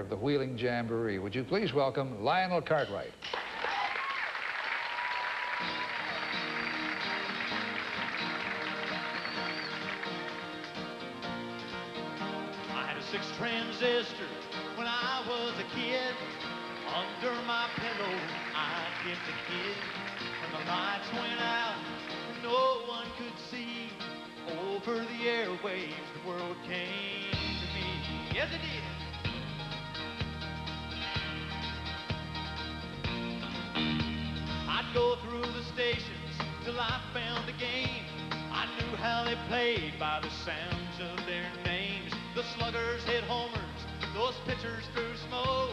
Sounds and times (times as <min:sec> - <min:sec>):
Music: 0:02.6 - 0:45.7.